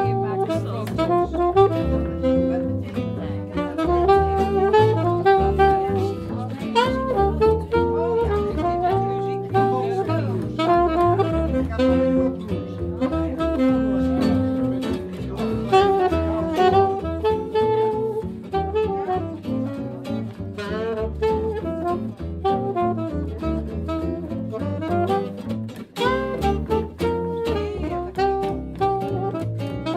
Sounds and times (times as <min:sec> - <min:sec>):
Speech: 0:00.0 - 0:29.5
Music: 0:00.0 - 0:29.9.